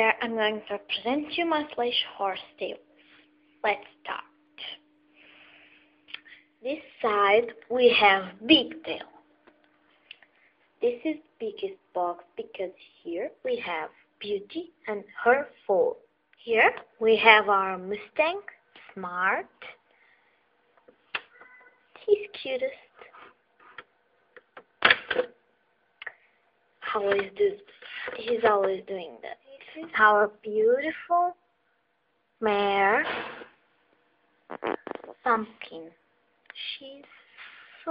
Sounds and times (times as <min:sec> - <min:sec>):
Speech: 0:00.0 - 0:02.8, 0:03.6 - 0:04.8, 0:06.6 - 0:09.2, 0:10.8 - 0:19.8, 0:22.0 - 0:23.0, 0:26.8 - 0:31.4, 0:32.4 - 0:33.2, 0:34.5 - 0:37.9.